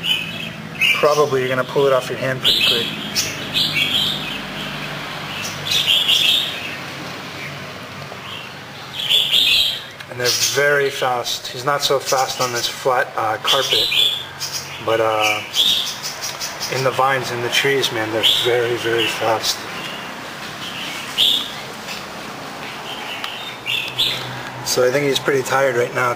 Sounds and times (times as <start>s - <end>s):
Bird vocalization, bird call, bird song: 0.0s - 12.8s, 13.4s - 25.7s.